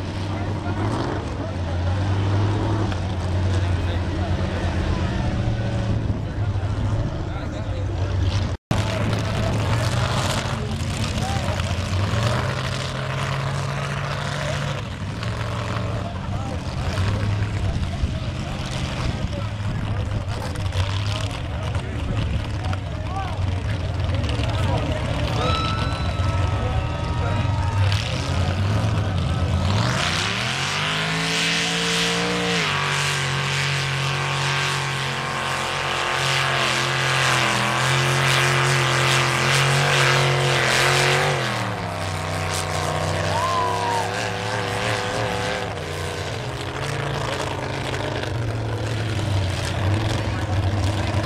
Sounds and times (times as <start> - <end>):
Truck: 0.0 - 51.2
Speech: 0.2 - 2.3, 3.2 - 12.5, 15.8 - 29.7, 49.8 - 51.2.